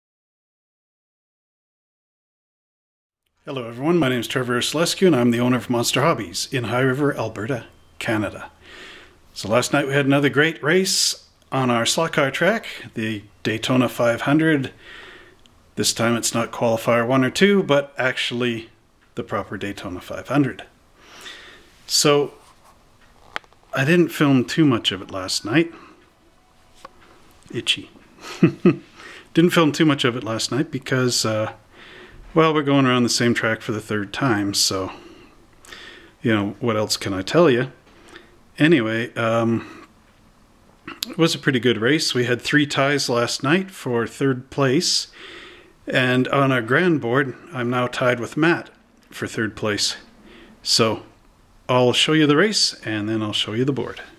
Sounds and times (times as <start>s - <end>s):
Speech: 3.5s - 8.6s, 9.4s - 14.8s, 15.8s - 20.8s, 21.9s - 22.4s, 23.7s - 25.8s, 27.5s - 28.0s, 29.4s - 31.6s, 32.4s - 35.0s, 36.2s - 37.8s, 38.6s - 39.9s, 40.9s - 45.2s, 45.9s - 54.1s.